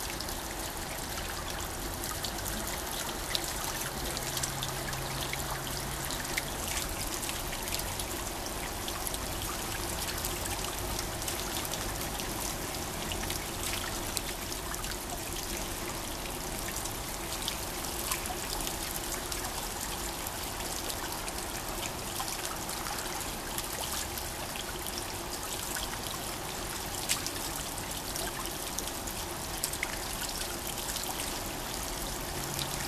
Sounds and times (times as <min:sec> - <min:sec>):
Stream: 0:00.0 - 0:32.8.